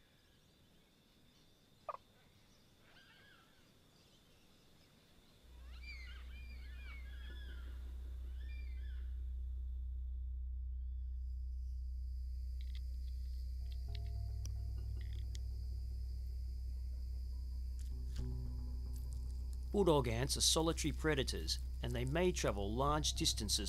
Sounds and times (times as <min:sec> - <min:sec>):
Insect: 0:00.0 - 0:10.1, 0:10.7 - 0:23.6
Outside, rural or natural: 0:00.0 - 0:23.6
Speech: 0:19.8 - 0:23.6.